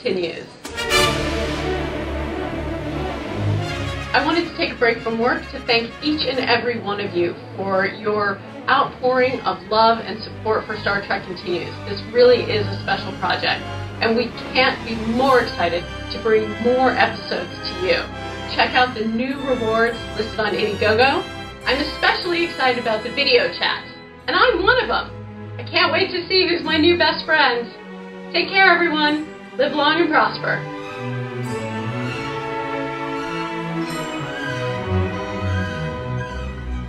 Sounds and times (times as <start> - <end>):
Speech: 0.0 - 0.6, 4.2 - 27.8, 28.4 - 30.6
Music: 0.1 - 36.8.